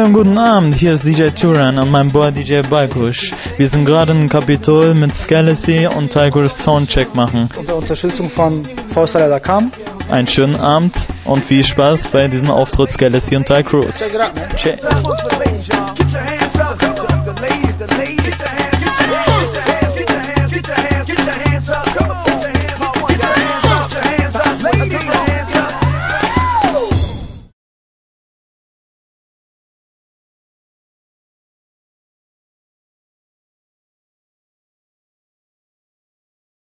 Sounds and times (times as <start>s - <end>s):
Speech: 0.0s - 15.5s
Music: 0.0s - 27.6s.